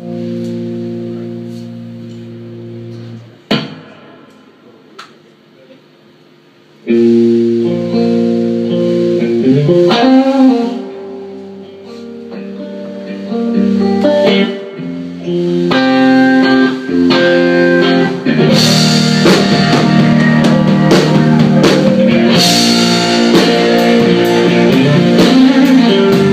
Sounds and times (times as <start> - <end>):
Music: 0.0 - 5.2, 6.7 - 26.3.